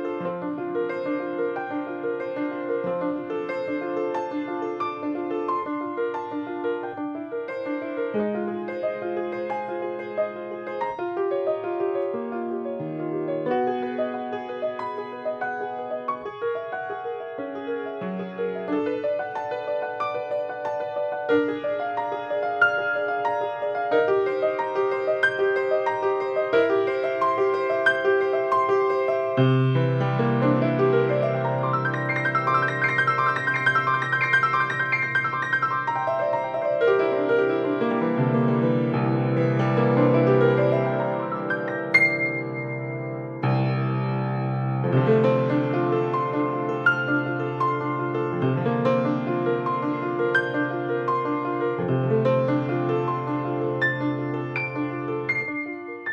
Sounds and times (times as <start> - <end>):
Music: 0.0 - 56.1.